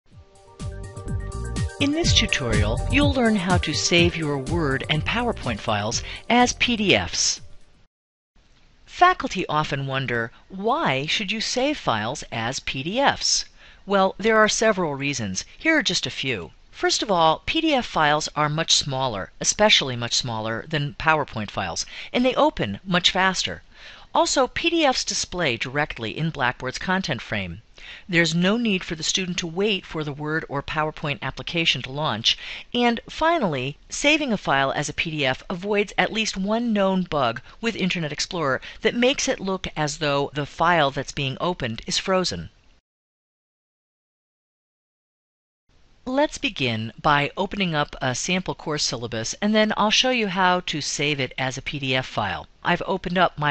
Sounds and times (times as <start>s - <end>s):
Narration, monologue: 0.6s - 42.8s, 45.7s - 53.5s.